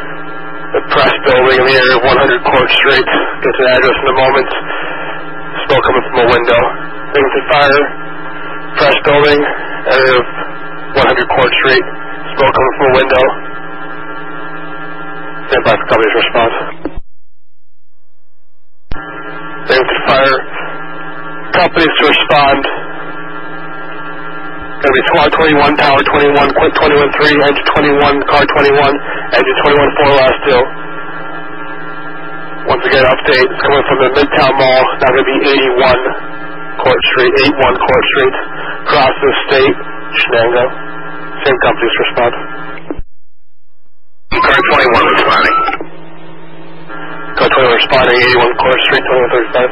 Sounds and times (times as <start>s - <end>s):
Speech: 0.8s - 4.7s, 5.6s - 8.0s, 8.8s - 10.4s, 11.0s - 13.4s, 15.5s - 16.9s, 19.7s - 20.6s, 21.5s - 22.8s, 24.8s - 30.8s, 32.7s - 36.2s, 36.8s - 40.8s, 41.4s - 42.5s, 44.3s - 45.8s, 47.4s - 49.7s.